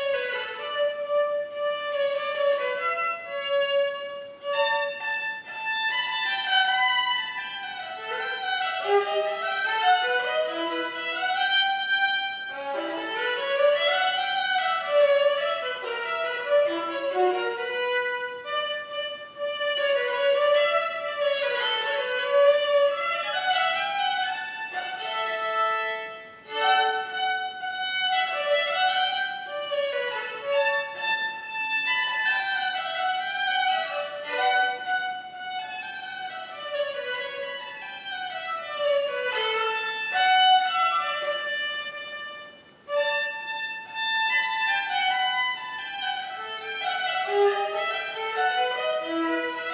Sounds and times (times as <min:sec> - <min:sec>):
Violin, fiddle: 0:00.0 - 0:49.7.